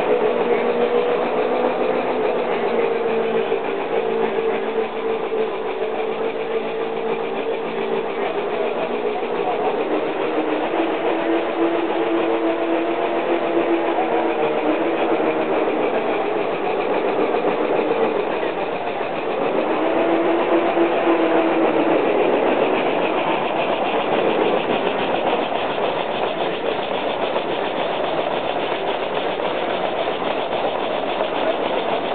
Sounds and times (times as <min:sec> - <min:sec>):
Idling: 0:00.0 - 0:32.1.